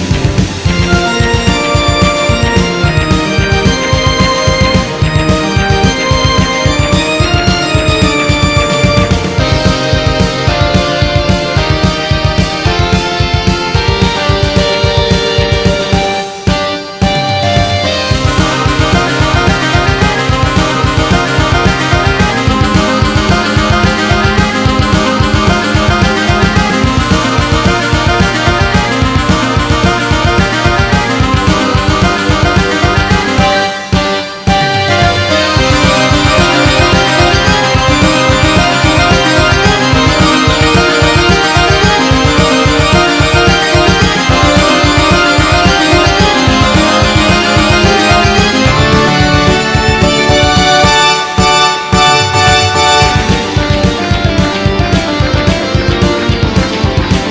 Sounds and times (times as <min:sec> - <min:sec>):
Video game music: 0:00.0 - 0:57.3.